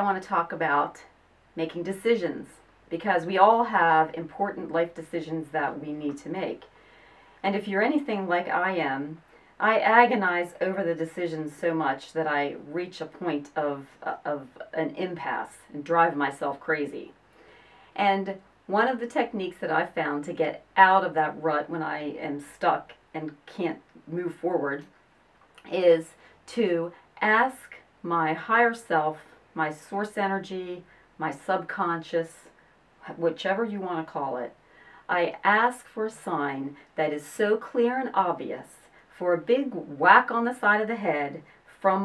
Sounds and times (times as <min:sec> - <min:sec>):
Speech: 0:00.0 - 0:06.7, 0:07.4 - 0:17.2, 0:18.0 - 0:24.9, 0:25.6 - 0:42.0.